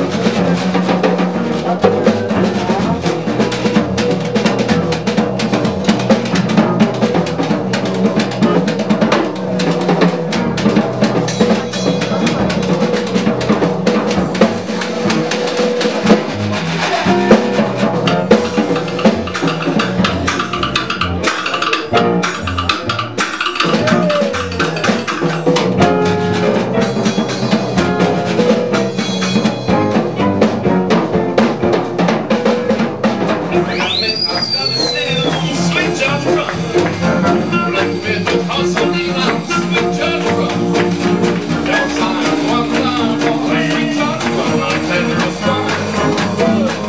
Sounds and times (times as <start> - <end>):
Drum kit: 0.0 - 46.8
Jazz: 0.0 - 46.8.